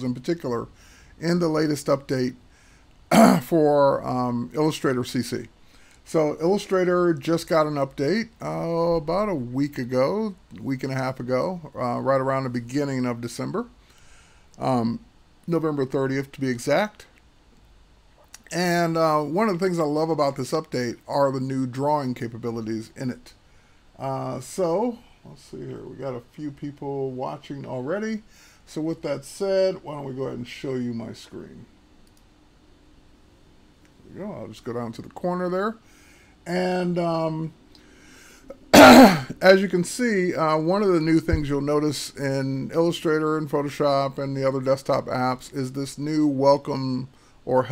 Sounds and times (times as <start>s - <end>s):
Speech: 0.0s - 2.4s, 3.1s - 13.8s, 14.6s - 17.1s, 18.4s - 23.4s, 24.0s - 31.7s, 34.0s - 35.8s, 36.5s - 37.6s, 39.0s - 47.7s.